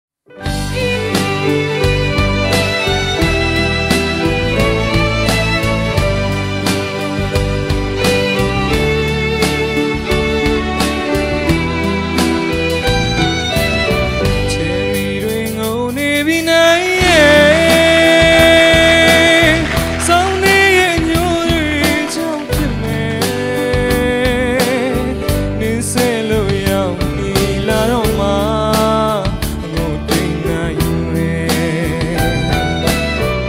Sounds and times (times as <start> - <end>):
Music: 0.2 - 33.4.